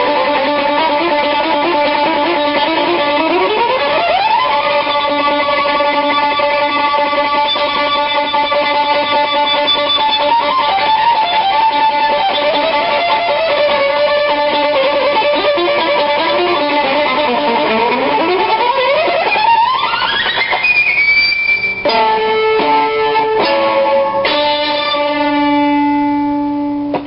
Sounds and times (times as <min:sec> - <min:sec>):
Violin, fiddle: 0:00.0 - 0:22.2.